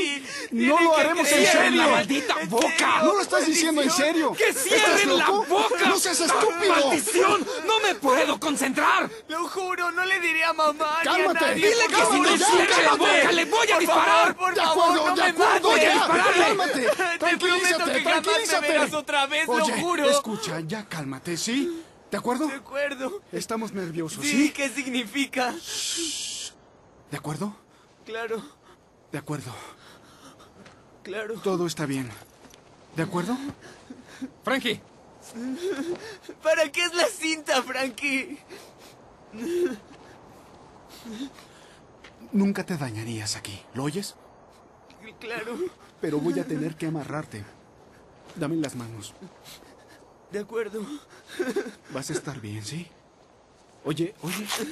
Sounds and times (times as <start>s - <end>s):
Speech: 0.0s - 25.6s.